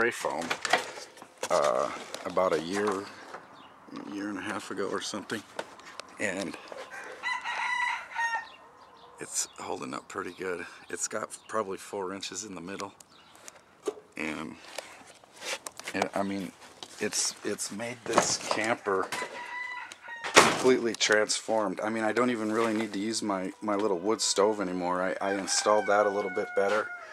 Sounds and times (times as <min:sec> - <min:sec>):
Speech: 0:00.0 - 0:00.6, 0:01.5 - 0:03.2, 0:03.9 - 0:05.5, 0:06.2 - 0:06.6, 0:09.2 - 0:13.0, 0:14.2 - 0:14.6, 0:15.9 - 0:19.1, 0:20.6 - 0:26.9
Outside, rural or natural: 0:00.0 - 0:27.1
Bird: 0:01.7 - 0:15.3.